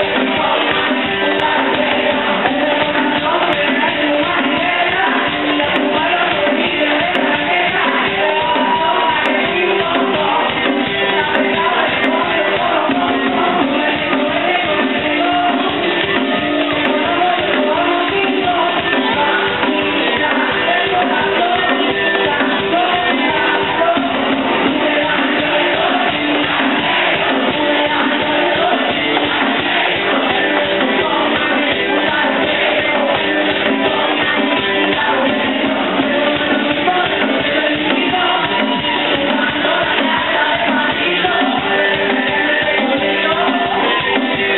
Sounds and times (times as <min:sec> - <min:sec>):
Music: 0:00.0 - 0:44.5.